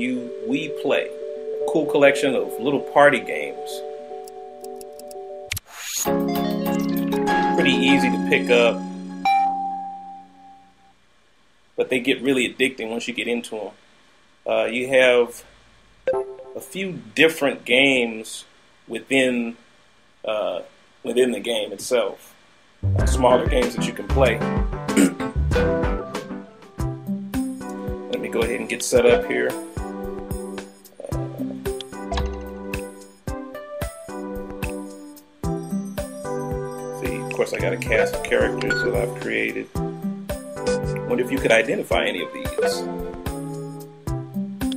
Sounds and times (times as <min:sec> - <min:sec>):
Speech: 0:00.0 - 0:01.1, 0:01.7 - 0:03.8, 0:07.6 - 0:08.8, 0:11.8 - 0:13.8, 0:14.5 - 0:15.5, 0:16.6 - 0:19.6, 0:20.2 - 0:22.4, 0:23.0 - 0:25.1, 0:28.1 - 0:29.6, 0:31.0 - 0:31.4, 0:37.0 - 0:39.7, 0:40.7 - 0:42.9
Music: 0:00.0 - 0:10.9, 0:22.8 - 0:44.7.